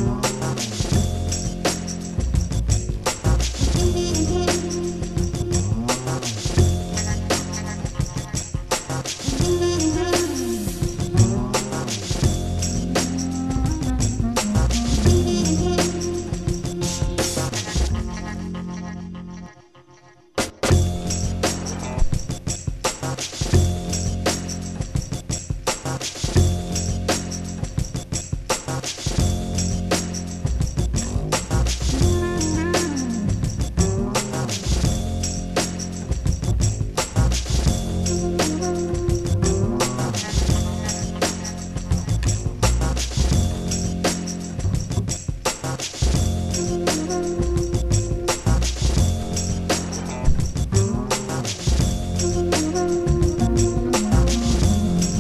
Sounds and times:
Music: 0:00.0 - 0:55.2.

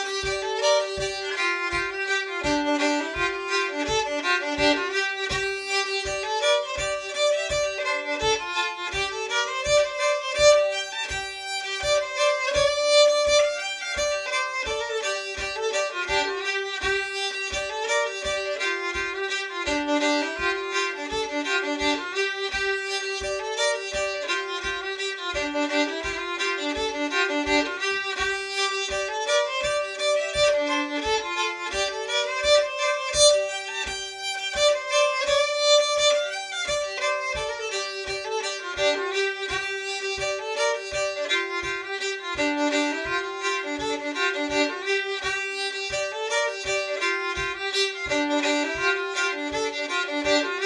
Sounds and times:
Violin, fiddle: 0:00.0 - 0:50.6.

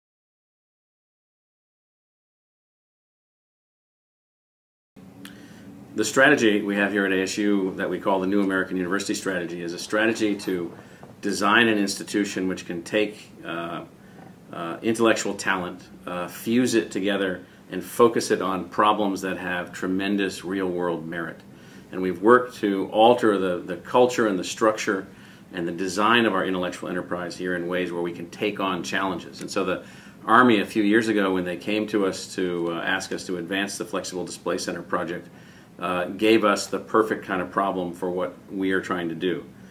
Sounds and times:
Speech: 0:06.0 - 0:13.9, 0:14.5 - 0:39.5.

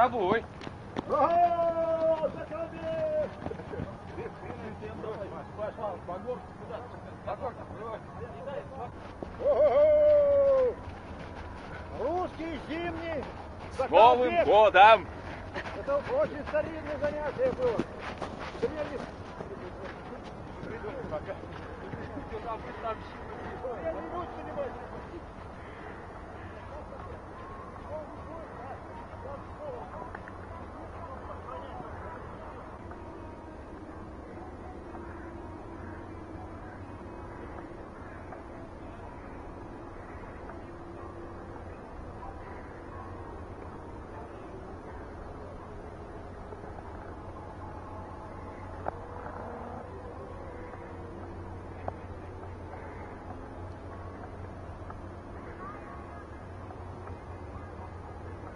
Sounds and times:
Outside, urban or manmade: 0:00.0 - 0:58.5
Run: 0:00.0 - 0:58.5.

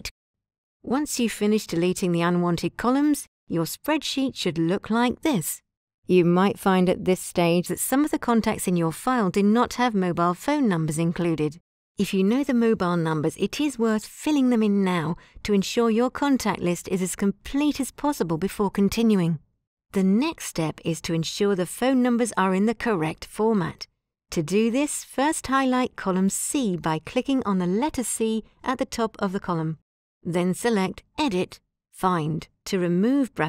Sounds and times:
Speech: 0:00.9 - 0:19.4, 0:20.0 - 0:33.4.

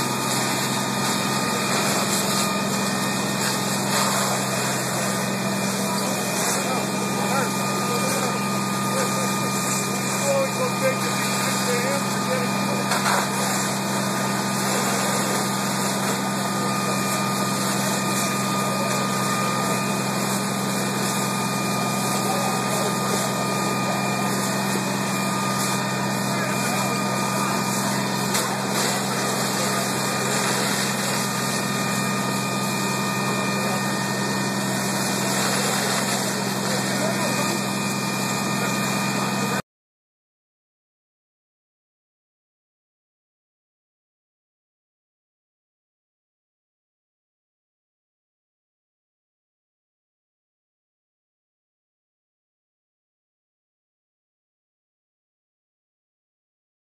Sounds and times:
Speech: 0:04.0 - 0:13.8, 0:14.6 - 0:32.4, 0:33.0 - 0:39.6.

